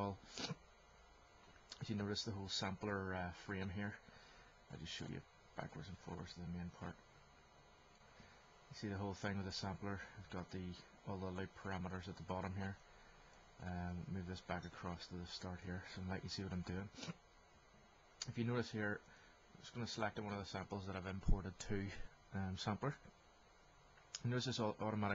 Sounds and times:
Speech: 0.0 - 0.6, 1.8 - 4.0, 4.7 - 7.0, 8.7 - 12.8, 13.6 - 17.2, 18.2 - 19.0, 19.6 - 23.1, 24.2 - 25.1.

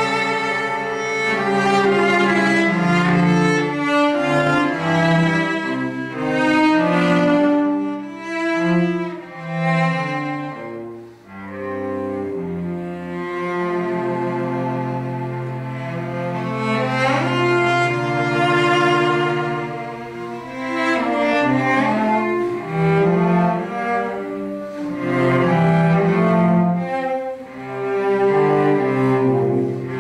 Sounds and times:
Cello: 0.0 - 30.0
Double bass: 0.0 - 30.0.

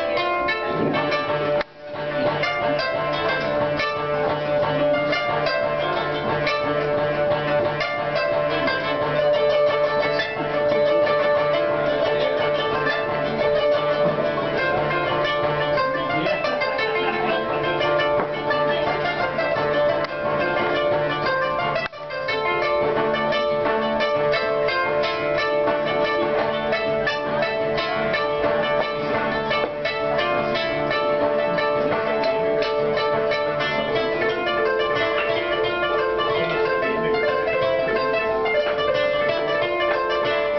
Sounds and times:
Traditional music: 0.0 - 40.5.

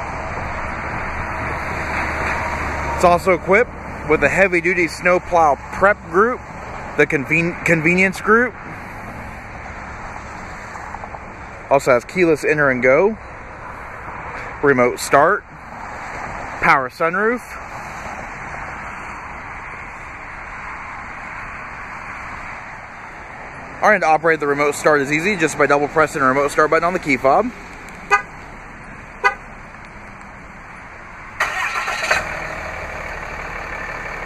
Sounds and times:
Car: 0.0 - 34.2
Outside, urban or manmade: 0.0 - 34.2
Speech: 3.0 - 6.4, 7.0 - 8.6, 11.7 - 13.2, 14.6 - 15.5, 16.6 - 17.6, 23.8 - 27.6.

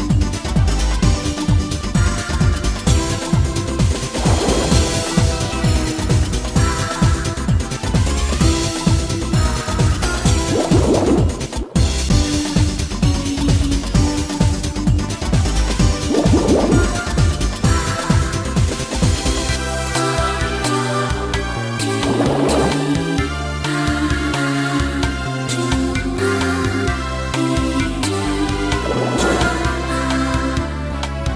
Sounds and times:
Music: 0.0 - 31.3.

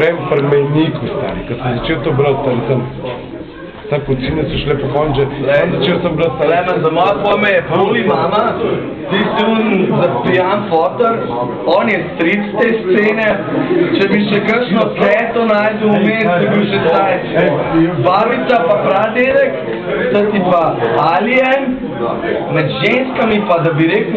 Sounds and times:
Speech: 0.0 - 24.1.

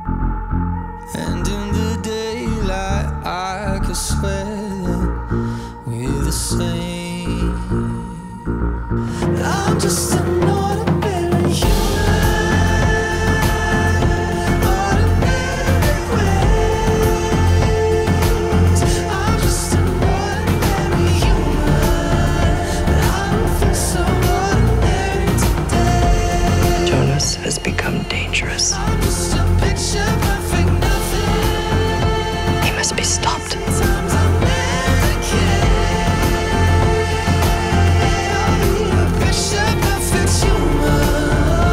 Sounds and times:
Rhythm and blues: 0.0 - 41.7.

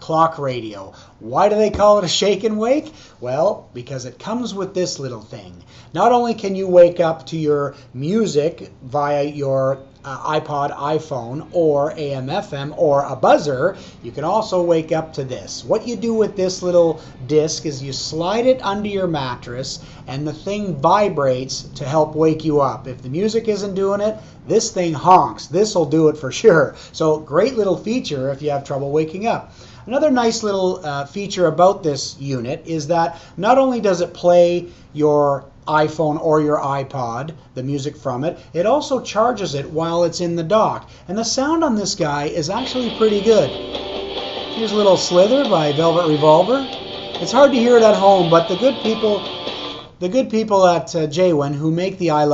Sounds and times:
Speech: 0.0 - 43.6, 44.6 - 49.2, 50.0 - 52.3.

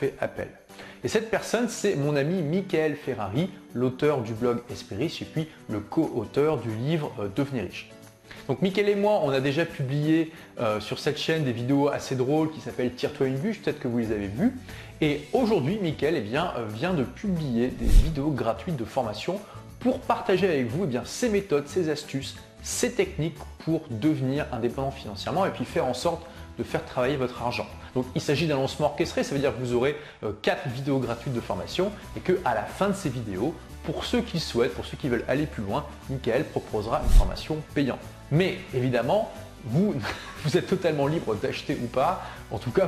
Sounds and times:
Speech: 0.0 - 7.9, 8.5 - 42.8
Music: 0.0 - 42.8.

